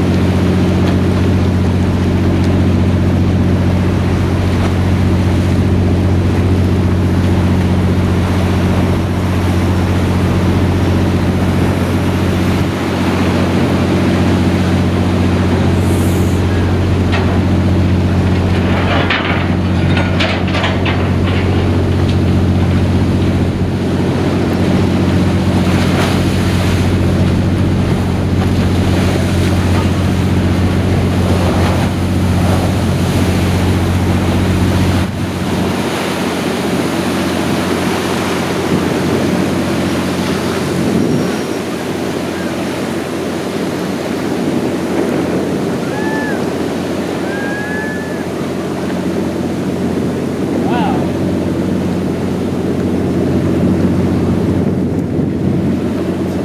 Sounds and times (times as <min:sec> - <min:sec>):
Ocean: 0:00.0 - 0:56.4
Ship: 0:00.0 - 0:56.4
Speech: 0:50.6 - 0:51.2.